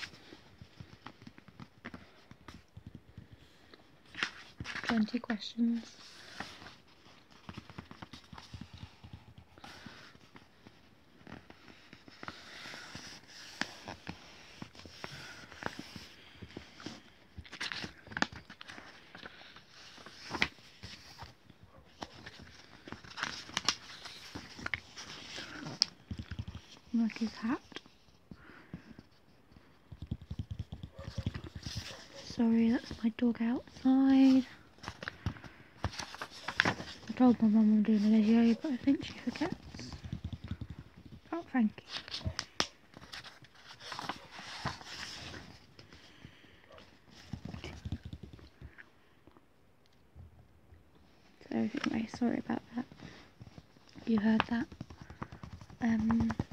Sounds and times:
Speech: 4.9 - 6.0, 32.2 - 34.5, 37.1 - 39.9, 41.3 - 41.8, 51.4 - 52.9, 54.0 - 54.7, 55.8 - 56.4.

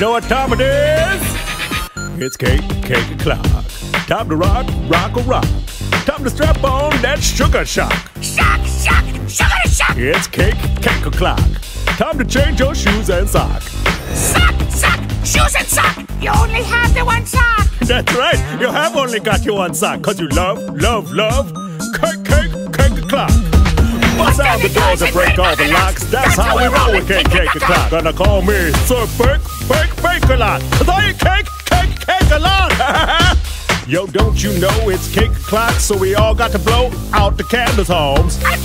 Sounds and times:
Music: 0.0 - 38.6.

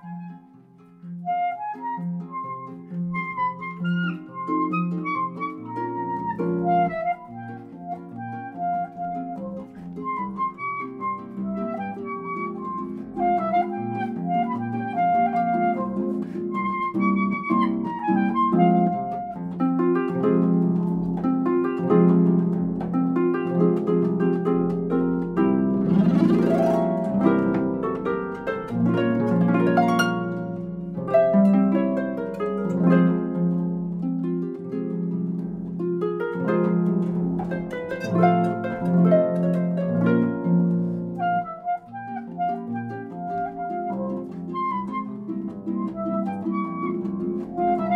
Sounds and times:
Harp: 0.0 - 47.9
Pizzicato: 0.0 - 47.9.

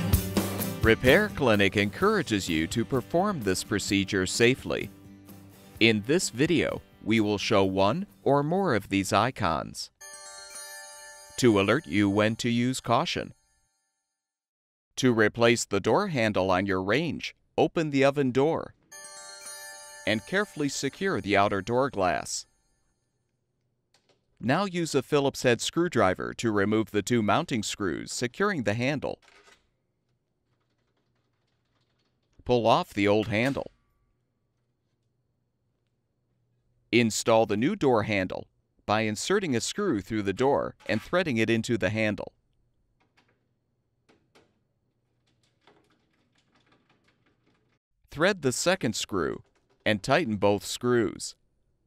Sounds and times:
Speech: 0.8 - 4.9, 5.8 - 10.0, 11.4 - 13.3, 15.0 - 18.8, 20.1 - 22.4, 24.4 - 29.2, 32.4 - 33.7, 37.0 - 42.3, 48.1 - 51.4.

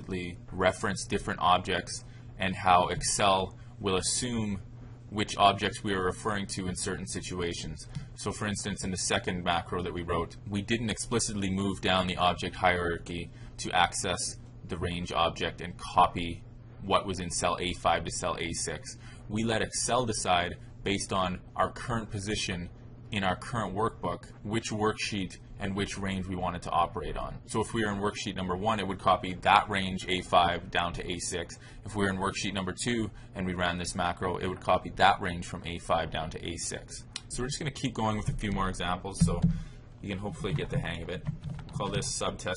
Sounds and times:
Speech: 0.0 - 42.5.

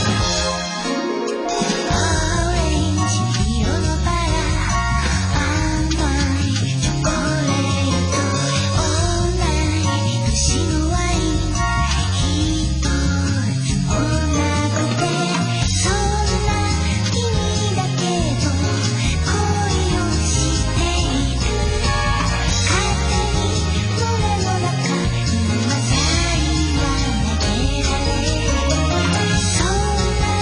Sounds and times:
Music: 0.0 - 30.4.

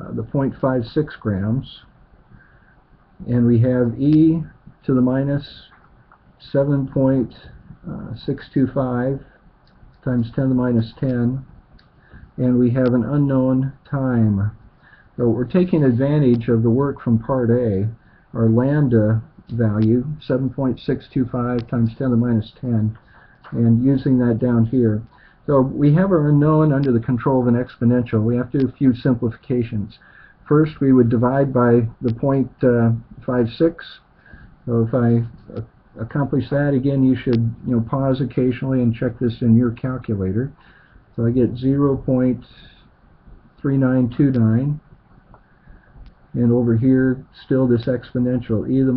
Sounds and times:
Speech: 0.0 - 2.0, 3.2 - 5.8, 6.4 - 9.4, 10.0 - 11.6, 12.4 - 14.6, 15.2 - 40.6, 41.2 - 43.0, 43.6 - 44.9, 46.3 - 48.9.

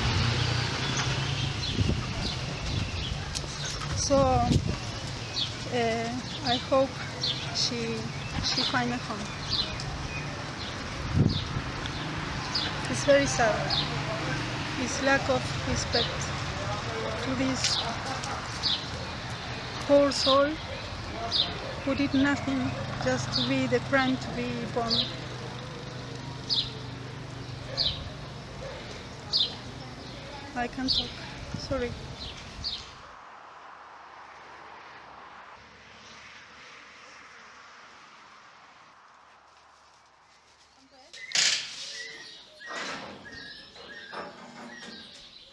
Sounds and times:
Outside, rural or natural: 0.0 - 45.5
Speech: 4.0 - 4.6, 5.7 - 9.9, 12.8 - 18.6, 19.8 - 25.4, 29.2 - 32.0.

